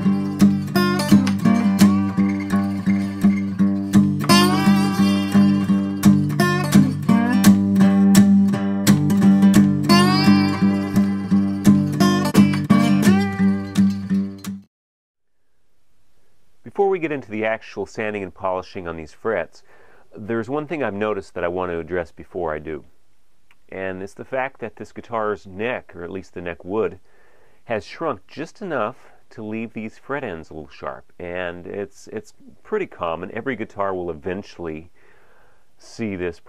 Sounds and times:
Speech: 16.6s - 22.9s, 23.7s - 27.0s, 27.7s - 34.9s, 35.8s - 36.4s.

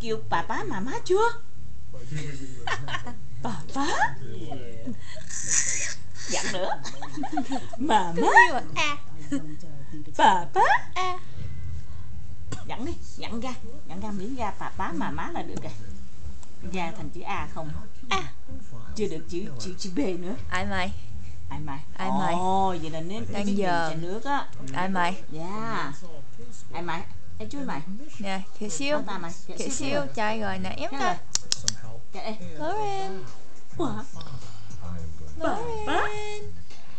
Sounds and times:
Speech: 2.0s - 5.0s, 6.2s - 11.2s, 16.7s - 33.4s, 34.2s - 36.5s.

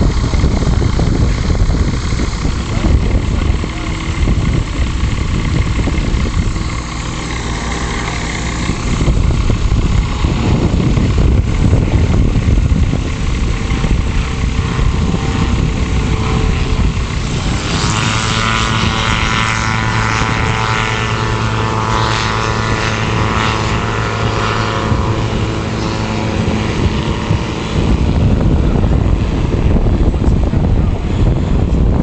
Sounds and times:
Helicopter: 0.0s - 32.0s
Propeller, airscrew: 0.0s - 32.0s.

